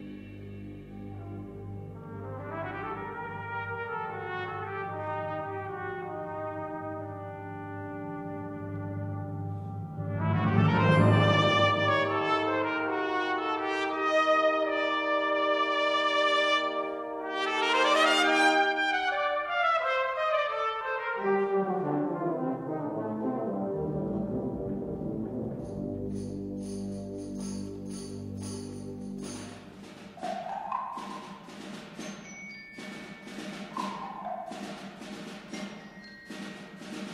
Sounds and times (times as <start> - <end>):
Trumpet: 1.0 - 30.4.